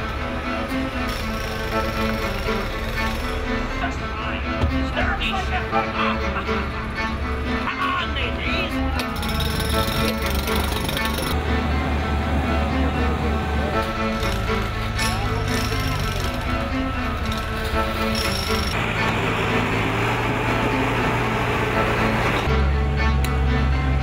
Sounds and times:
Music: 0:00.0 - 0:24.0
Speech: 0:03.8 - 0:06.5, 0:07.7 - 0:09.1.

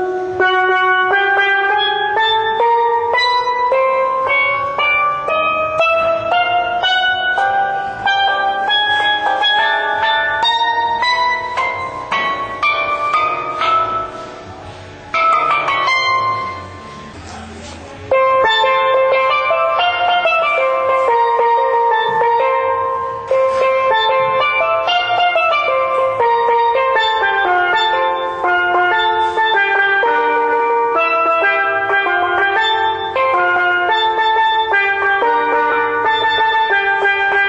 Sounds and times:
Music: 0:00.0 - 0:37.4.

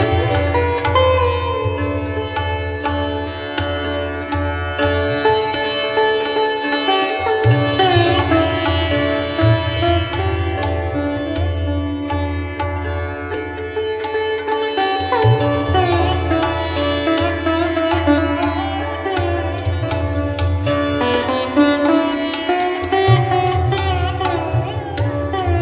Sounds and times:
Sitar: 0:00.0 - 0:25.6.

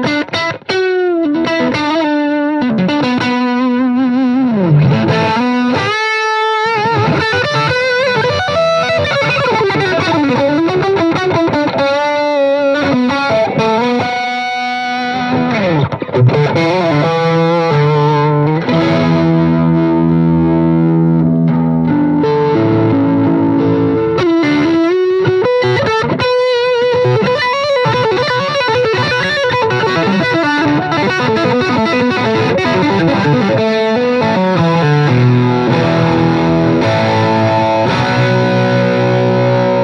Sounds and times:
Strum: 0:00.0 - 0:39.8.

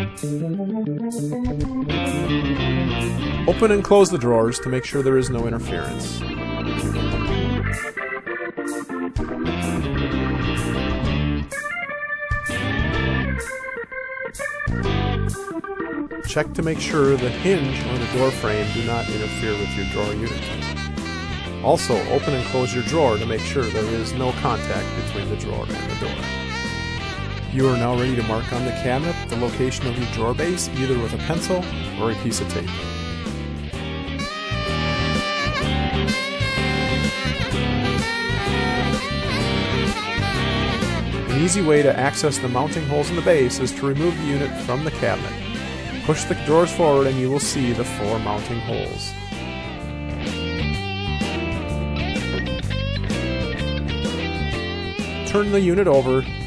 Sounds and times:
Electric guitar: 0:00.0 - 0:03.6, 0:05.6 - 0:16.2, 0:16.8 - 0:56.4
Speech: 0:03.5 - 0:06.2, 0:16.3 - 0:20.6, 0:21.6 - 0:26.2, 0:27.5 - 0:32.8, 0:41.3 - 0:49.2, 0:55.2 - 0:56.4.

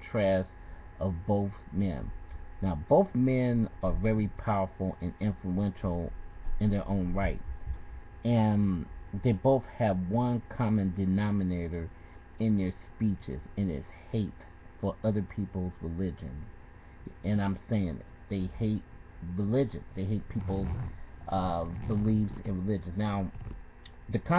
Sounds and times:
Male speech, man speaking: 0:00.0 - 0:07.4, 0:08.2 - 0:16.5, 0:17.1 - 0:24.3.

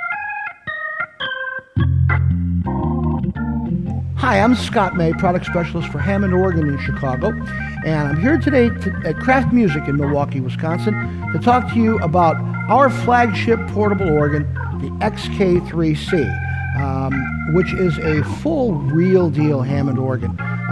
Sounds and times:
Background music: 0:00.0 - 0:20.7
Speech: 0:04.2 - 0:20.4.

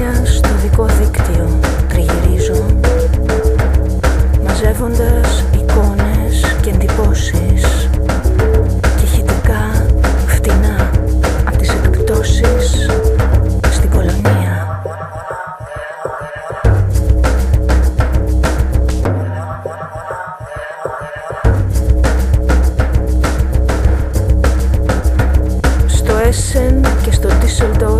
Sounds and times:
Speech: 0:00.0 - 0:02.8, 0:04.4 - 0:07.9, 0:09.0 - 0:13.0, 0:13.7 - 0:14.8, 0:25.9 - 0:27.9
Music: 0:00.0 - 0:27.9.

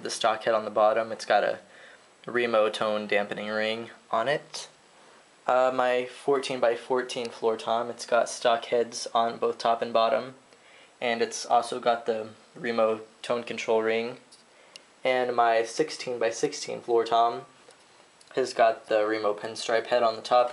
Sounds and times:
Speech: 0:00.0 - 0:01.7, 0:02.3 - 0:04.8, 0:05.5 - 0:10.4, 0:11.0 - 0:14.4, 0:15.0 - 0:17.6, 0:18.3 - 0:20.5.

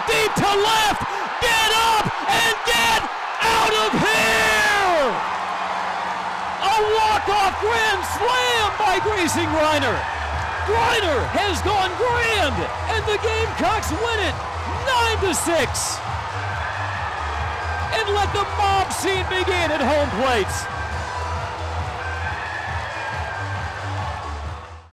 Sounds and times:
Speech: 0:00.0 - 0:05.2, 0:06.6 - 0:10.0, 0:10.7 - 0:16.0, 0:17.9 - 0:20.7
Music: 0:05.0 - 0:24.9.

